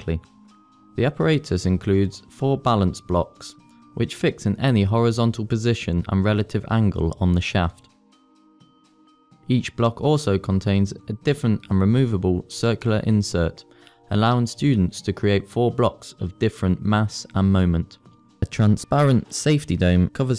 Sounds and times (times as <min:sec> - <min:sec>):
Speech: 0:00.0 - 0:00.3, 0:01.0 - 0:07.9, 0:09.5 - 0:20.3.